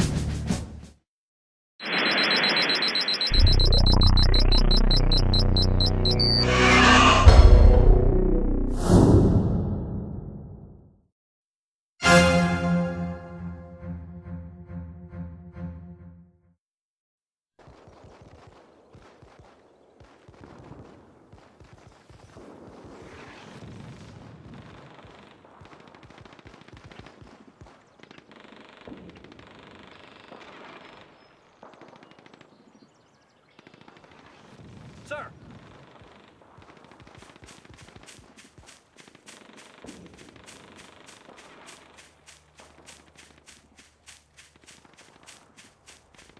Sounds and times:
Speech: 35.0s - 35.4s.

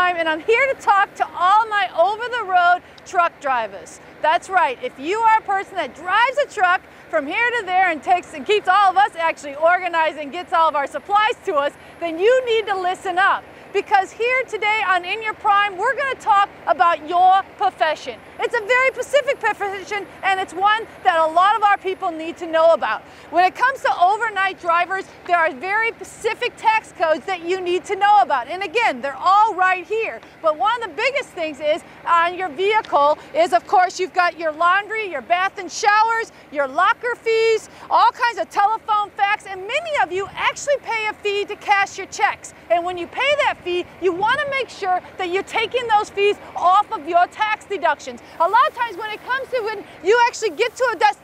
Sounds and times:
Speech: 0.0s - 51.2s.

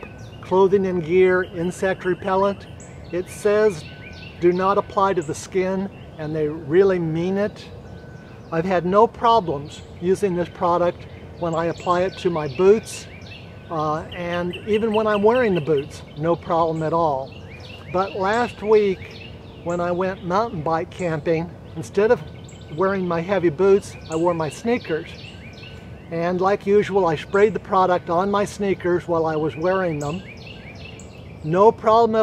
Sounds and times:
Speech: 0.5s - 2.6s, 3.2s - 3.8s, 4.4s - 7.7s, 8.5s - 13.1s, 13.7s - 17.3s, 17.9s - 19.1s, 19.7s - 22.2s, 22.8s - 25.2s, 26.1s - 30.2s, 31.4s - 32.2s.

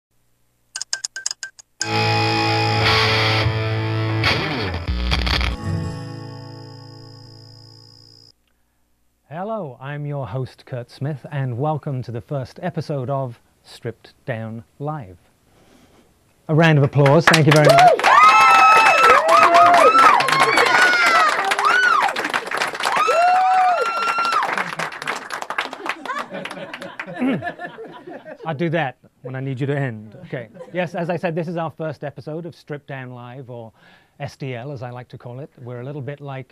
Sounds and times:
Music: 1.8s - 7.9s
Speech: 9.3s - 15.2s, 16.5s - 17.8s, 28.4s - 36.5s.

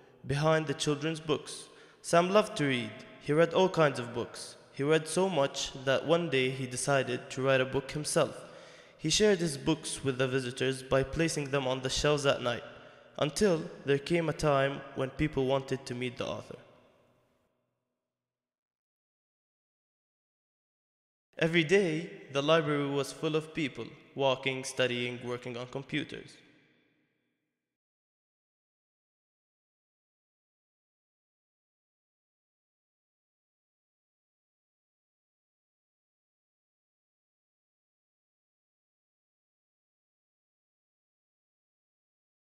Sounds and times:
Speech: 0.2s - 8.4s, 9.0s - 12.6s, 13.2s - 16.6s, 21.4s - 26.4s.

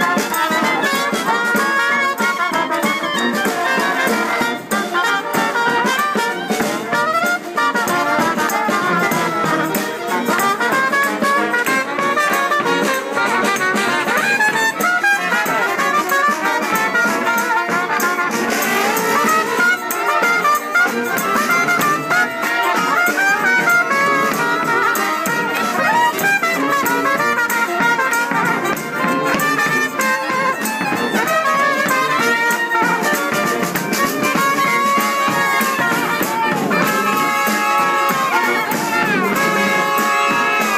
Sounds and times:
Trumpet: 0.0s - 40.7s.

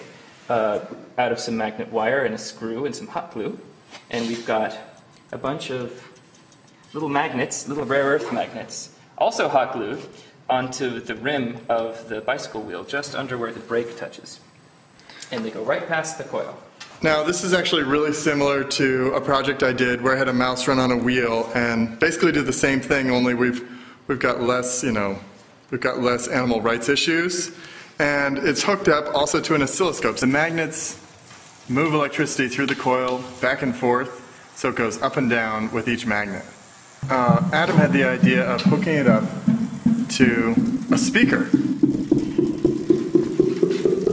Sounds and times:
Speech: 0.0s - 6.2s, 6.9s - 14.4s, 15.3s - 31.0s, 31.7s - 39.4s, 40.1s - 41.6s.

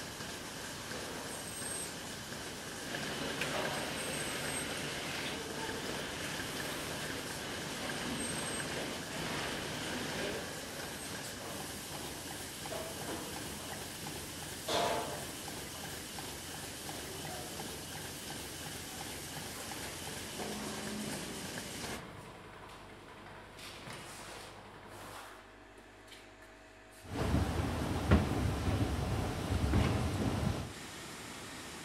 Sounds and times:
Speech: 5.3s - 6.0s, 9.9s - 10.6s, 16.9s - 18.0s.

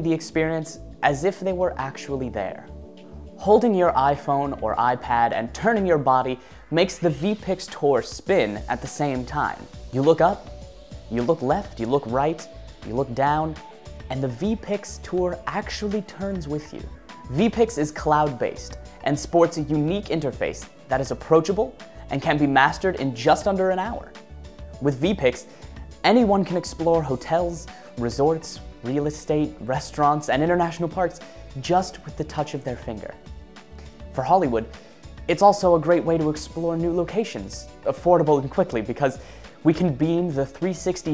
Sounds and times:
Speech: 0.0s - 2.7s, 3.4s - 10.5s, 11.1s - 24.2s, 24.8s - 33.2s, 34.1s - 41.1s
Music: 0.0s - 41.1s.

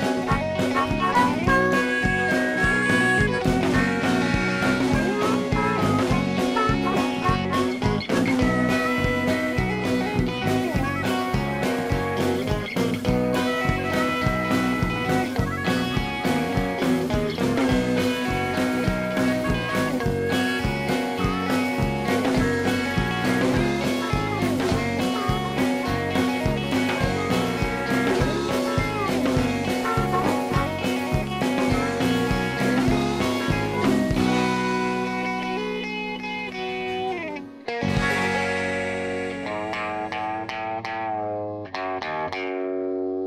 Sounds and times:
Music: 0.0s - 43.2s.

